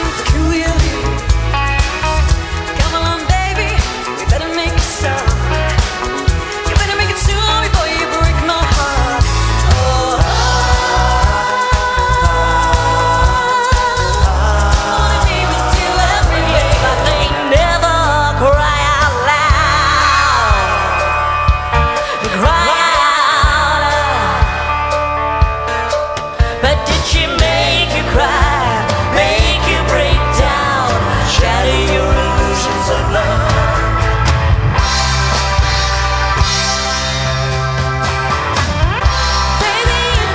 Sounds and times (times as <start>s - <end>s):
Singing: 9.6s - 21.1s, 26.6s - 34.0s.